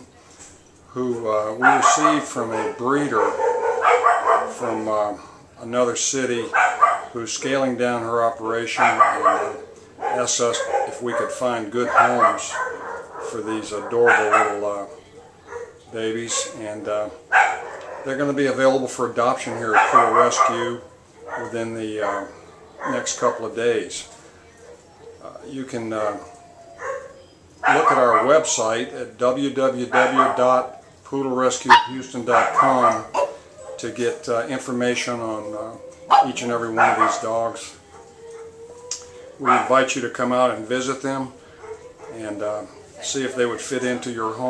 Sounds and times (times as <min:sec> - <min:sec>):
Speech: 0:00.9 - 0:03.4, 0:04.3 - 0:06.6, 0:07.2 - 0:12.6, 0:13.2 - 0:15.2, 0:15.9 - 0:17.2, 0:18.1 - 0:20.8, 0:21.4 - 0:24.2, 0:25.2 - 0:26.4, 0:27.7 - 0:33.2, 0:33.8 - 0:37.8, 0:39.4 - 0:41.4, 0:42.1 - 0:44.5
Yip: 0:01.6 - 0:04.6, 0:06.5 - 0:07.1, 0:08.8 - 0:14.6, 0:17.3 - 0:18.1, 0:19.7 - 0:21.5, 0:26.8 - 0:28.4, 0:30.0 - 0:30.4, 0:31.7 - 0:33.8, 0:36.1 - 0:37.2, 0:39.4 - 0:39.7.